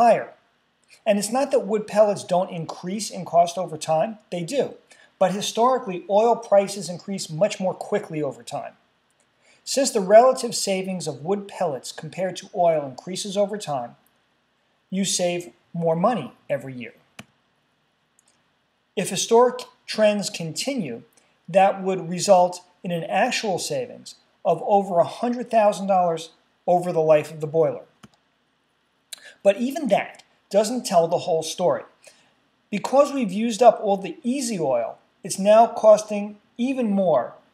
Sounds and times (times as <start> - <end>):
Speech: 0.0 - 0.4, 1.0 - 8.8, 9.6 - 14.0, 14.9 - 17.1, 19.0 - 28.0, 29.2 - 32.0, 32.7 - 37.5.